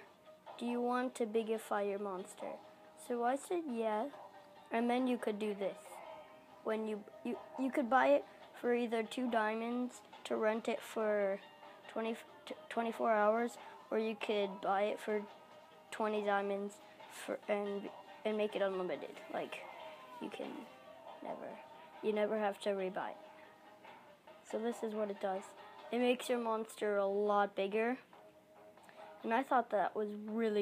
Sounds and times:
Speech: 0.6s - 4.1s, 4.7s - 6.0s, 6.6s - 15.3s, 15.9s - 23.2s, 24.5s - 28.0s, 29.2s - 30.6s.

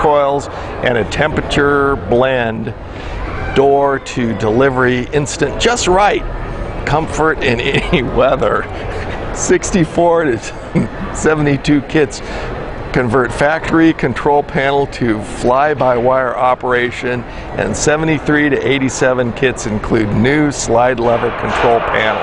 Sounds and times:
Speech: 0.0s - 2.8s, 3.5s - 6.2s, 6.8s - 8.8s, 9.4s - 12.2s, 12.9s - 22.2s.

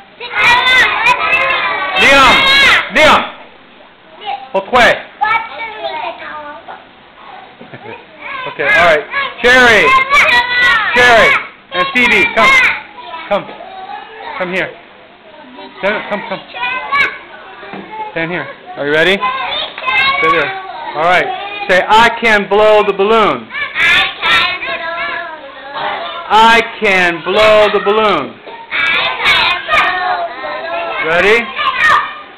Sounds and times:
Children playing: 0.0s - 3.3s, 5.2s - 32.3s
Child speech, kid speaking: 0.2s - 2.9s, 4.1s - 4.6s, 5.2s - 14.6s, 15.3s - 21.7s, 27.1s - 32.2s.

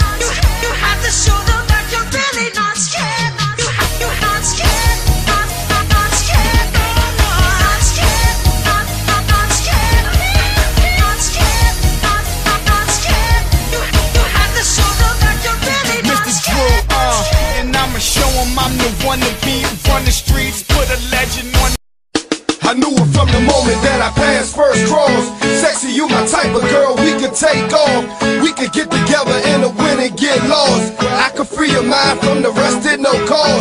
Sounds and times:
Music: 0.0s - 33.6s.

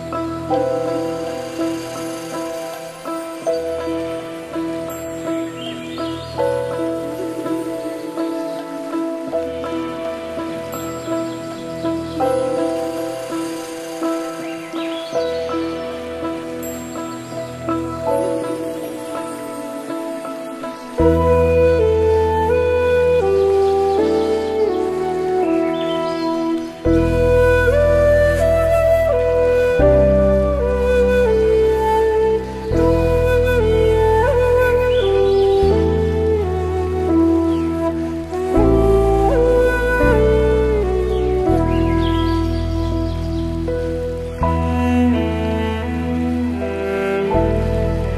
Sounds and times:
Tender music: 0.0s - 48.1s.

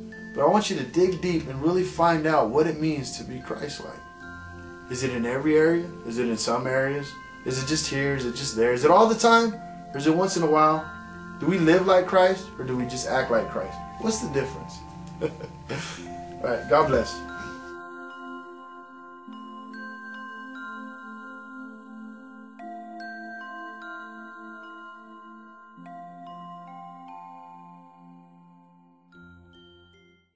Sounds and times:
Music: 0.0s - 30.3s.

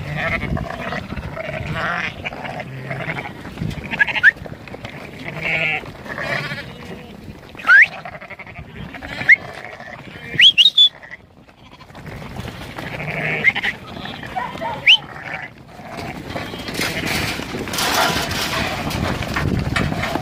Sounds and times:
Livestock, farm animals, working animals: 0.0s - 20.2s.

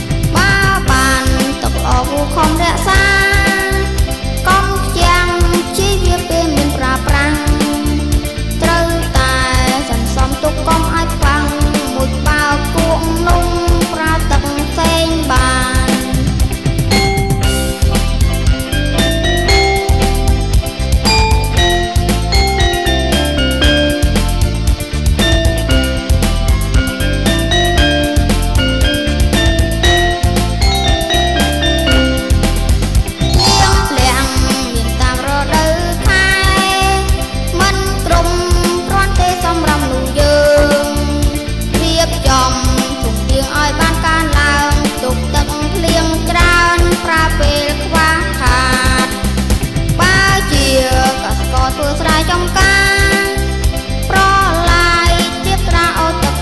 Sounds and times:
Music: 0.0s - 56.4s.

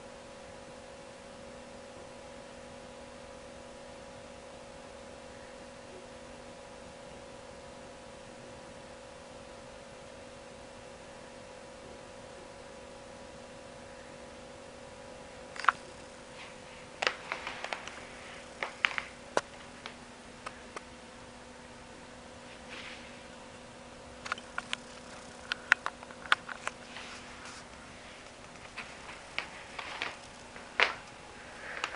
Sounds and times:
Inside, small room: 0.0s - 31.9s.

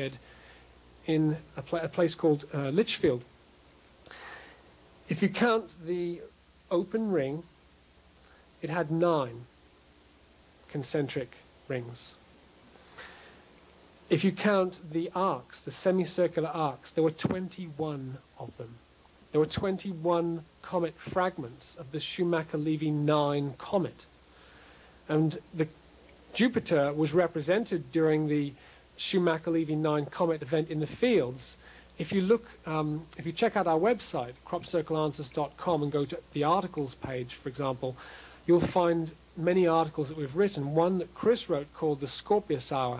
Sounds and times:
Speech: 0.0s - 0.2s, 1.0s - 3.3s, 5.1s - 7.5s, 8.6s - 9.5s, 10.7s - 12.2s, 14.1s - 24.1s, 25.1s - 42.9s.

